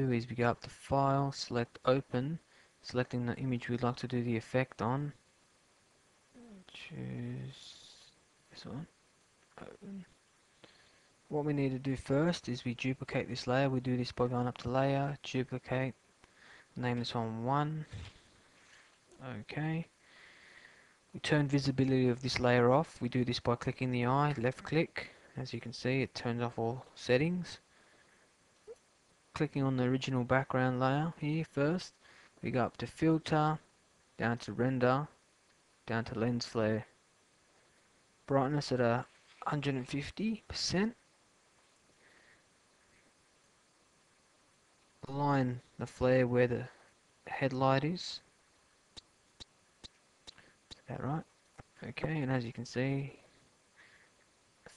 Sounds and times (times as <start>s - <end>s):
Speech: 0.0s - 5.2s, 6.4s - 8.9s, 9.6s - 10.2s, 11.3s - 16.0s, 16.8s - 18.1s, 19.2s - 19.9s, 21.2s - 27.6s, 29.4s - 35.2s, 35.9s - 37.0s, 38.3s - 41.0s, 45.0s - 48.3s, 50.7s - 53.2s.